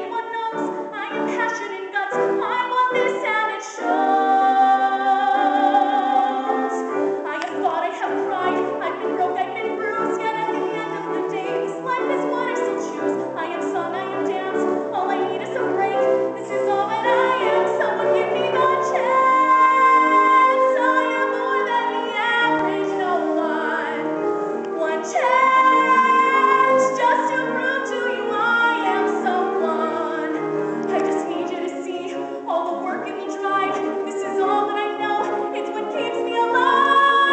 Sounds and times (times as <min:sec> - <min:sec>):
Female singing: 0:00.0 - 0:24.1, 0:24.7 - 0:37.3
Music: 0:00.0 - 0:37.3.